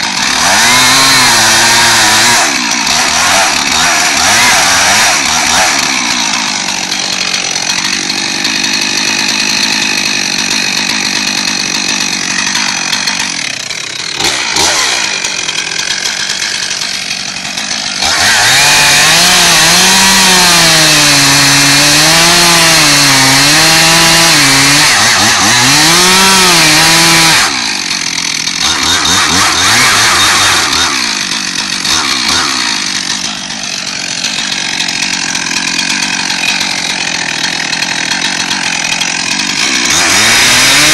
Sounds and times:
Chainsaw: 0:00.0 - 0:40.9.

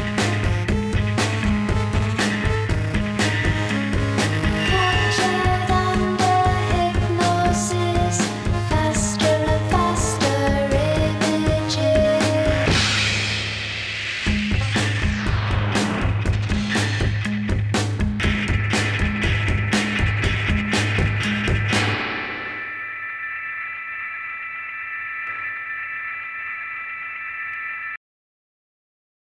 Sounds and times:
Music: 0:00.0 - 0:23.0.

